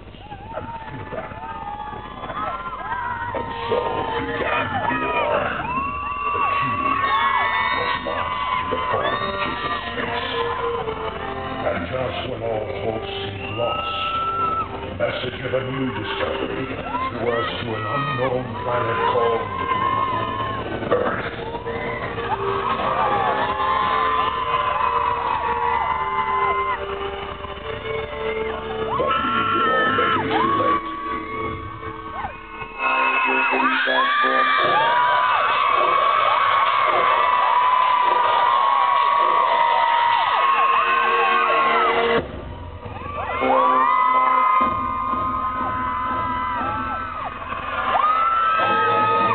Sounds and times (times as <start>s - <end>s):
Theme music: 0.0s - 49.3s
Speech: 11.6s - 13.9s, 15.0s - 20.0s, 20.7s - 21.3s, 29.0s - 30.8s, 32.8s - 35.0s, 48.6s - 49.3s.